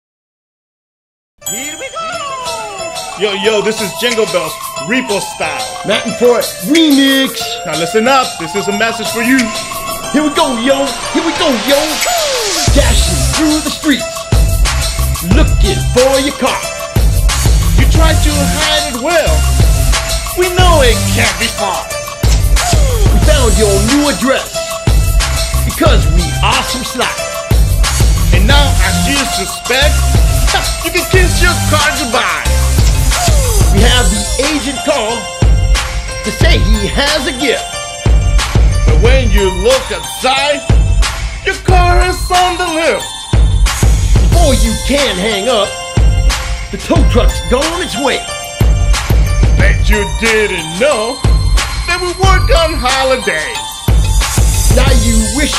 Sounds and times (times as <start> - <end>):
Music: 1.4 - 55.5.